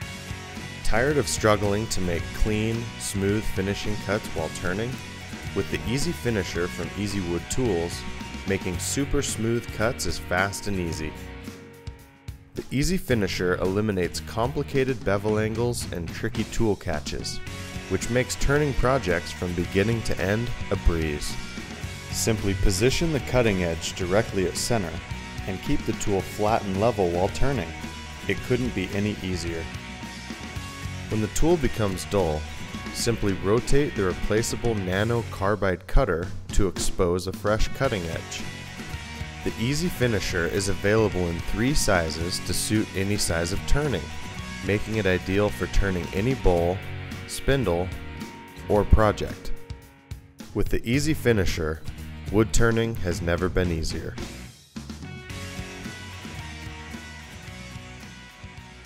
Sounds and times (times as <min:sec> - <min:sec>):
Music: 0:00.0 - 0:58.8
Speech: 0:00.8 - 0:11.2, 0:12.6 - 0:21.4, 0:22.1 - 0:29.7, 0:31.1 - 0:38.5, 0:39.4 - 0:48.0, 0:48.6 - 0:49.6, 0:50.5 - 0:54.2.